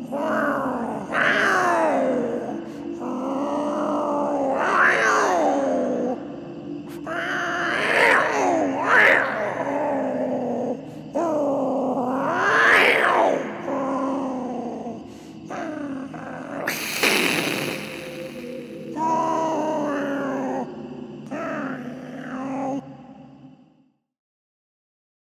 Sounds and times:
Hiss: 16.7s - 18.8s.

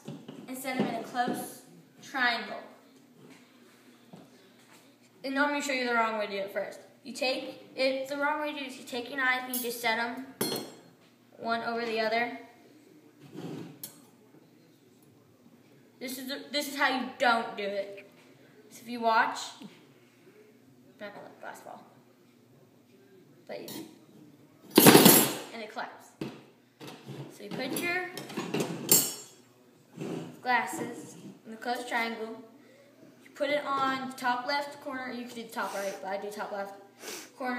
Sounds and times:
Speech: 0.5s - 2.8s, 27.3s - 28.2s, 29.7s - 32.5s, 33.3s - 36.8s.

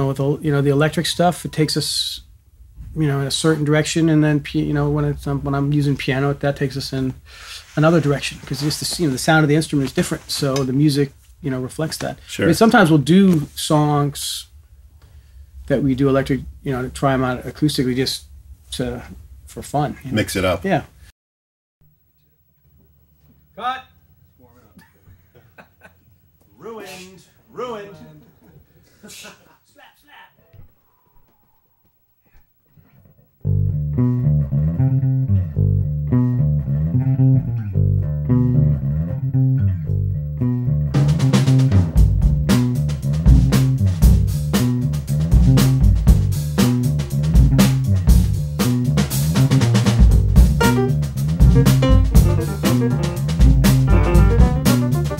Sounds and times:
Speech: 0.0s - 2.3s, 2.9s - 7.2s, 7.8s - 14.6s, 15.7s - 21.0s, 23.6s - 24.8s, 26.5s - 28.5s, 29.1s - 30.5s.

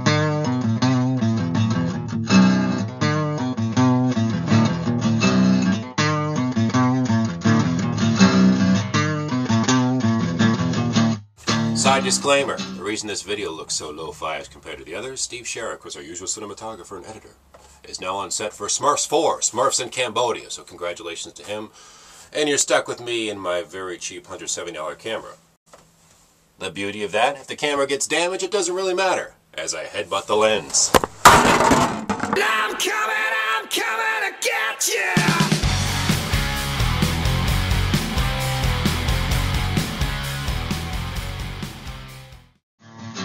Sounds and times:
Music: 0.0s - 12.8s, 35.2s - 43.2s
Speech: 11.7s - 21.7s, 22.3s - 25.4s, 26.6s - 31.0s, 32.4s - 35.5s.

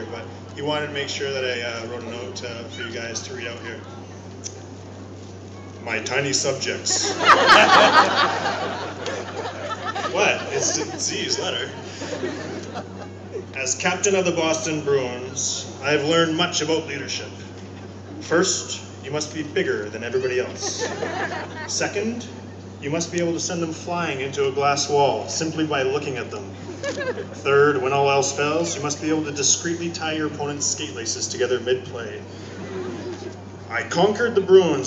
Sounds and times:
Male speech, man speaking: 0.0s - 3.9s, 5.8s - 7.2s, 10.1s - 11.8s, 13.6s - 17.4s, 18.2s - 21.0s, 21.7s - 26.6s, 27.4s - 32.2s, 33.7s - 34.8s
Narration, monologue: 0.0s - 34.8s.

